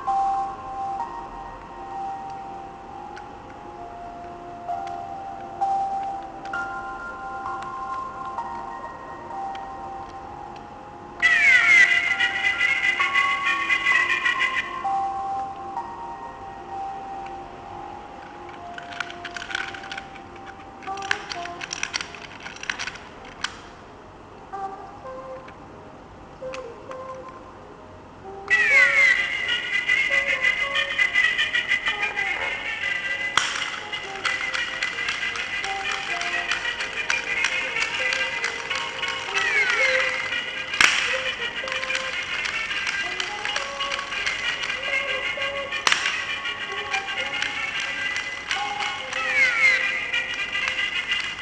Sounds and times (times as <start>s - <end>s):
Music: 0.0s - 23.9s, 24.5s - 51.4s.